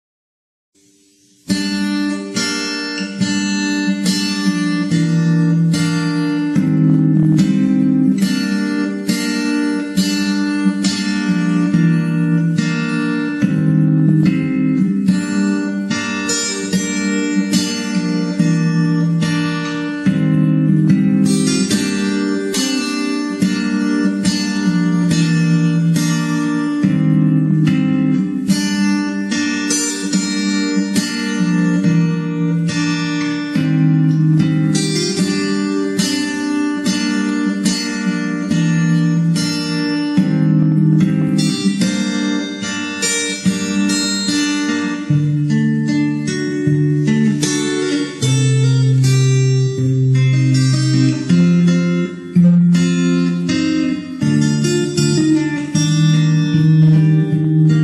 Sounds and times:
Guitar: 0.8s - 57.8s.

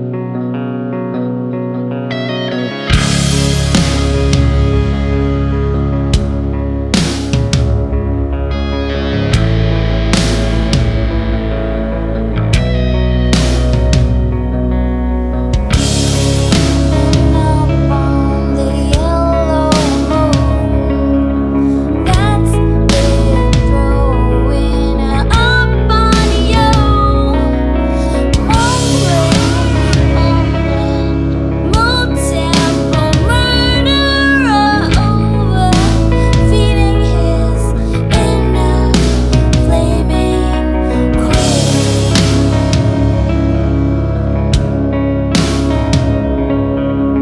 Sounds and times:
Music: 0.0s - 47.2s.

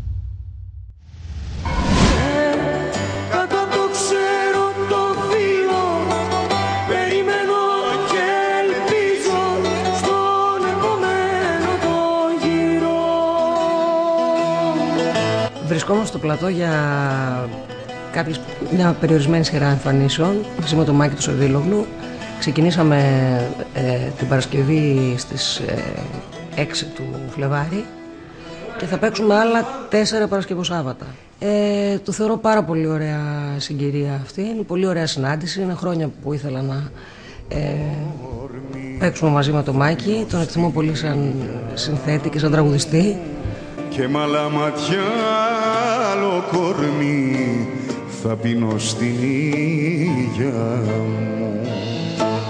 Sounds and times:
Music: 1.6s - 31.4s, 36.8s - 52.4s
Speech: 15.6s - 17.6s, 18.2s - 27.9s, 28.6s - 43.4s.

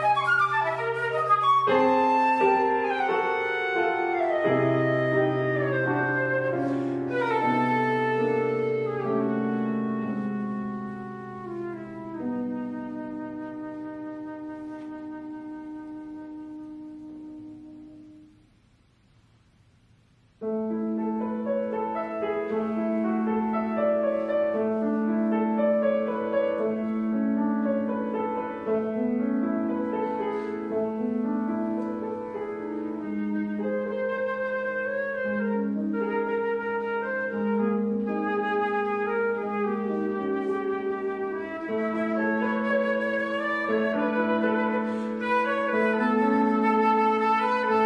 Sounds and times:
Flute: 0.0s - 18.4s, 21.0s - 47.8s
Piano: 0.0s - 47.8s.

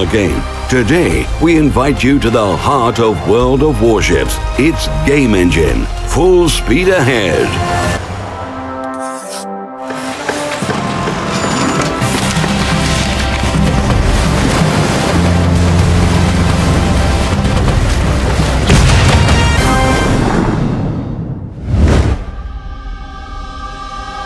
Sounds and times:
Music: 0.0s - 21.5s, 22.1s - 24.2s.

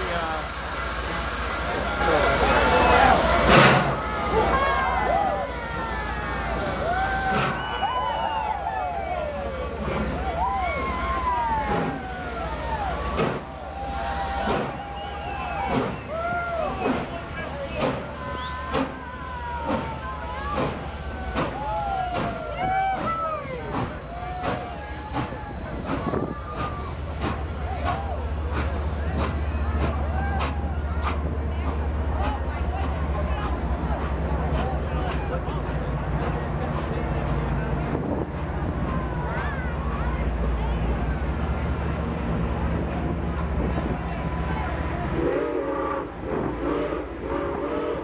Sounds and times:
Speech: 0.0s - 3.7s, 15.5s - 45.4s.

